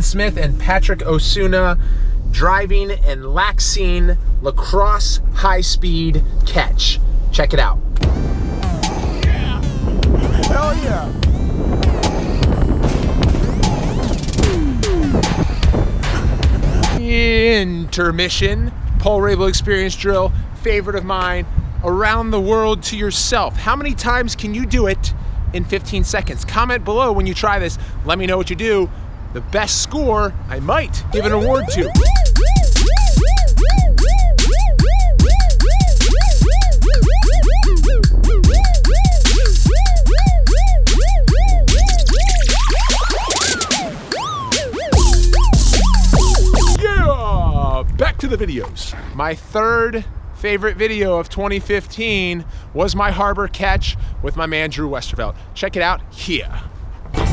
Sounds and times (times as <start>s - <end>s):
Speech: 0.0s - 1.8s, 2.4s - 7.8s, 10.4s - 11.2s, 17.0s - 32.0s, 46.8s - 56.7s
Music: 8.0s - 17.0s, 31.2s - 46.8s.